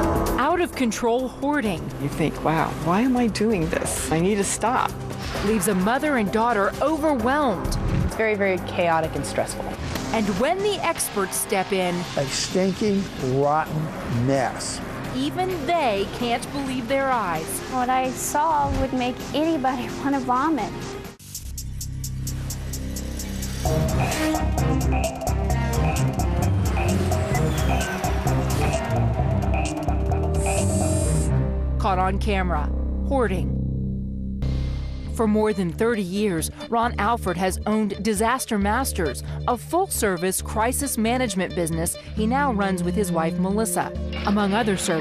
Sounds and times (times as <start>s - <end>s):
Music: 0.0s - 45.0s
Speech: 5.5s - 20.7s, 35.2s - 45.0s.